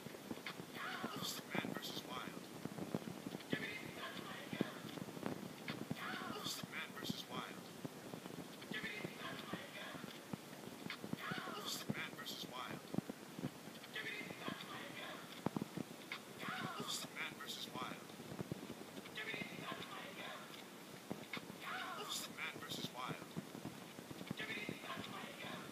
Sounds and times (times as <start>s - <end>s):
Speech: 0.8s - 2.4s, 3.5s - 4.9s, 6.0s - 7.6s, 8.7s - 10.1s, 11.2s - 12.8s, 14.0s - 15.3s, 16.4s - 18.0s, 19.2s - 20.5s, 21.6s - 23.3s, 24.4s - 25.7s.